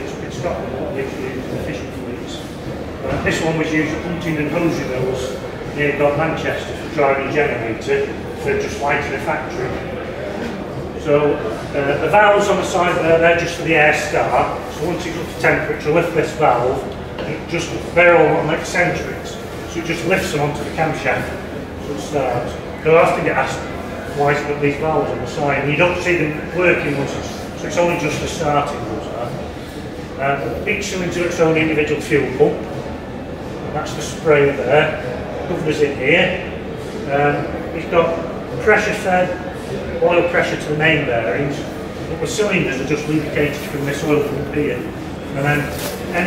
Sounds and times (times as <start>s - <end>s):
Speech: 0.0s - 46.2s.